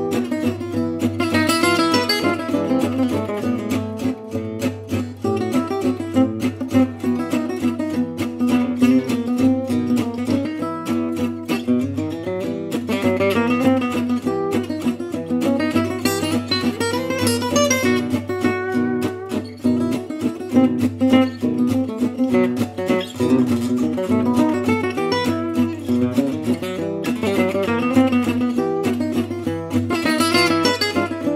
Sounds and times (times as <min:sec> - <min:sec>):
Acoustic guitar: 0:00.0 - 0:31.3.